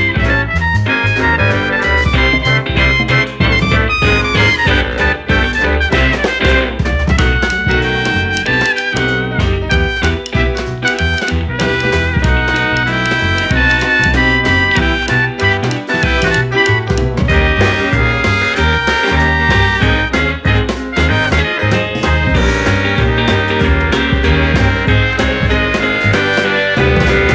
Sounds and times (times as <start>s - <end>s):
Soundtrack music: 0.0s - 27.3s
Theme music: 0.0s - 27.3s.